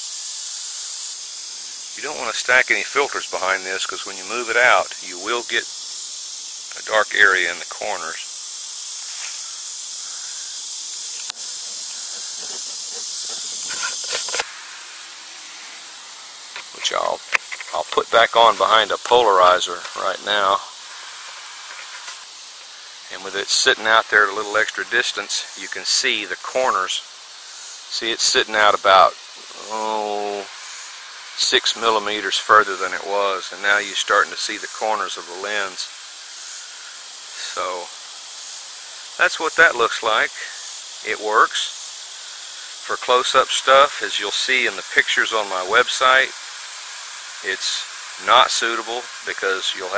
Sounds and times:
Speech: 2.0s - 5.6s, 6.7s - 8.3s, 16.8s - 20.7s, 23.1s - 27.0s, 27.9s - 30.5s, 31.4s - 35.9s, 37.4s - 37.9s, 39.2s - 41.7s, 42.8s - 46.3s, 47.4s - 49.9s
Camera: 13.3s - 14.5s.

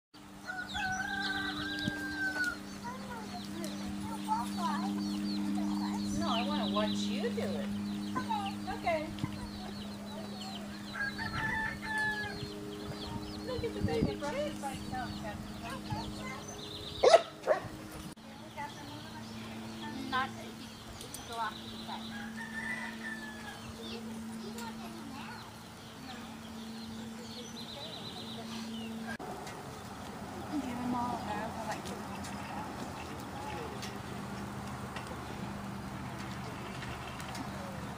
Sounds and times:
Speech: 30.5s - 32.7s.

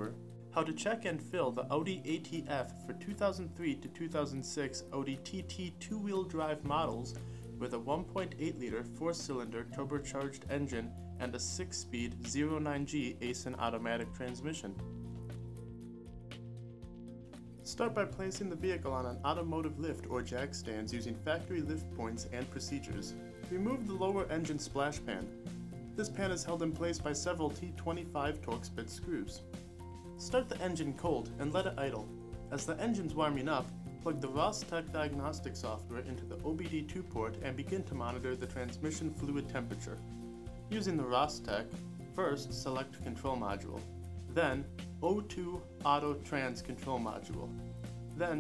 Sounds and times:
Speech: 0.0s - 14.8s, 17.7s - 25.3s, 26.0s - 29.4s, 30.2s - 40.0s, 40.7s - 47.5s, 48.2s - 48.4s
Music: 0.0s - 48.4s.

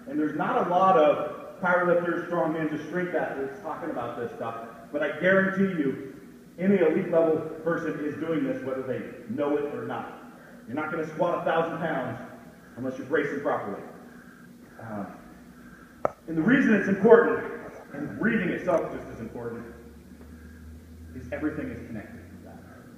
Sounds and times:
Speech: 0.1s - 14.0s, 14.8s - 15.2s, 16.3s - 19.8s, 21.2s - 22.9s.

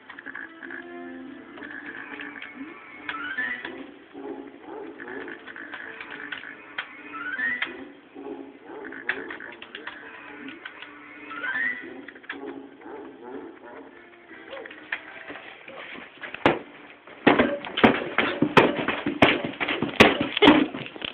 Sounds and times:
Music: 0.0s - 21.1s.

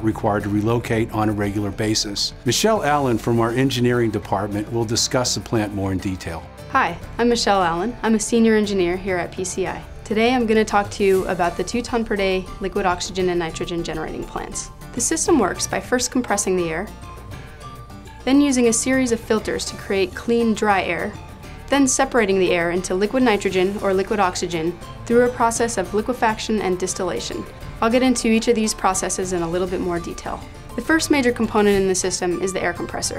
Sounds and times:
Speech: 0.0s - 16.9s, 21.7s - 33.1s
Music: 0.0s - 33.1s.

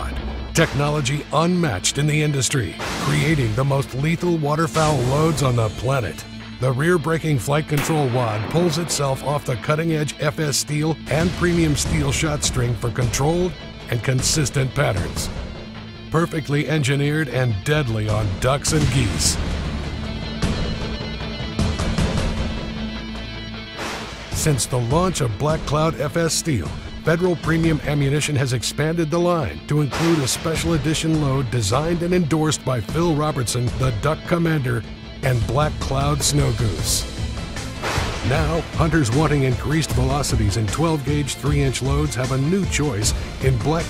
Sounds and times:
Speech: 0.0s - 15.3s, 16.1s - 19.4s, 24.4s - 37.1s, 38.2s - 43.8s
Music: 0.0s - 43.8s.

